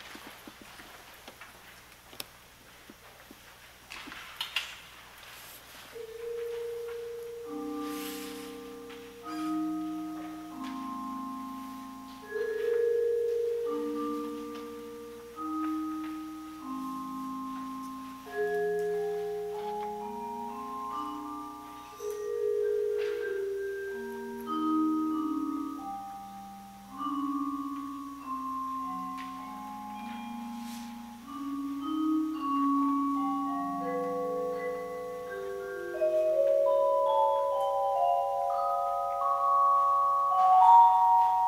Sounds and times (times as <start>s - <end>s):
Vibraphone: 6.0s - 41.4s.